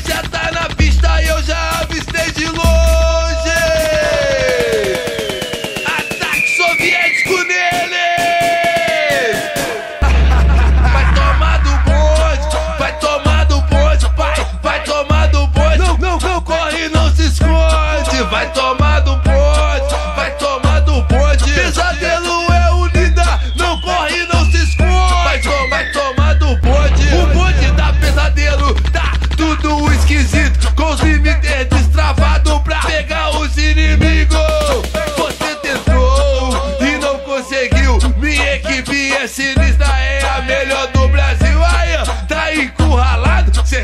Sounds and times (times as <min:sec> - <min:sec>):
Music: 0:00.0 - 0:43.8.